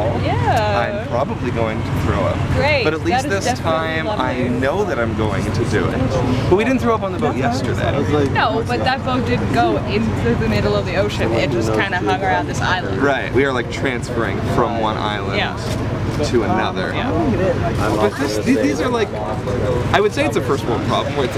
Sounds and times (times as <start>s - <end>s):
Speech: 0.0s - 15.6s, 16.2s - 21.3s.